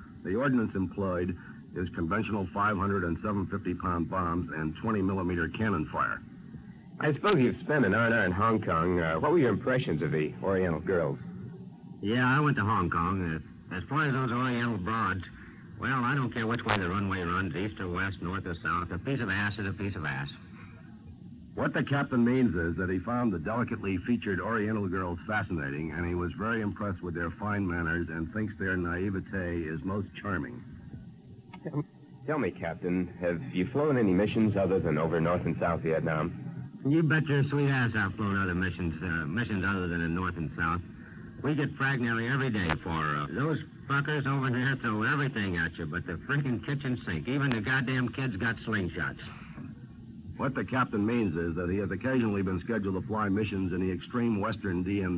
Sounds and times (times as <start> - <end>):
Radio: 7.0 - 11.4, 12.0 - 20.5, 21.6 - 30.7, 31.6 - 49.8.